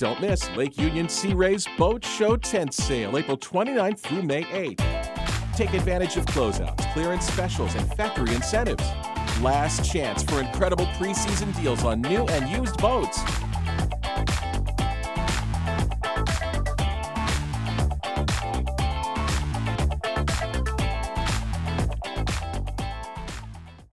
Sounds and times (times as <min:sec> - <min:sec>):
Music: 0:00.0 - 0:23.9.